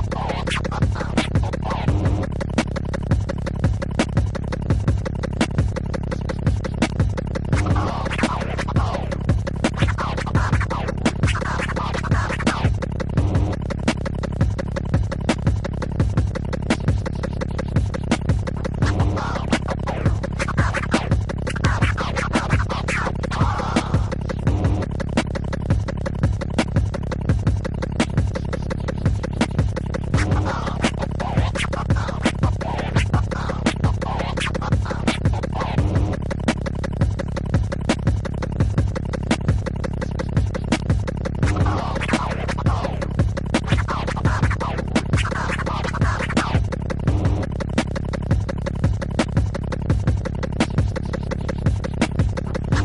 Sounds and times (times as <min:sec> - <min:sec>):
Scratching (performance technique): 0:00.0 - 0:52.8.